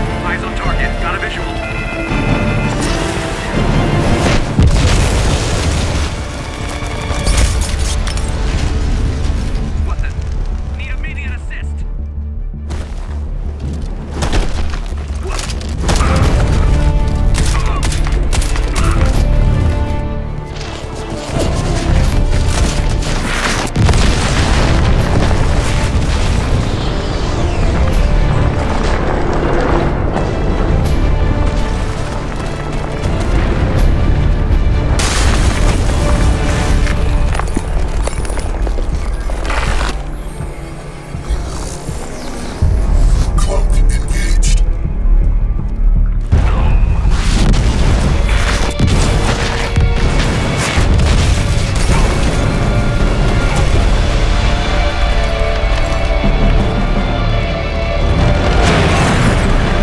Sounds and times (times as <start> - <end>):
Music: 0.0 - 59.8.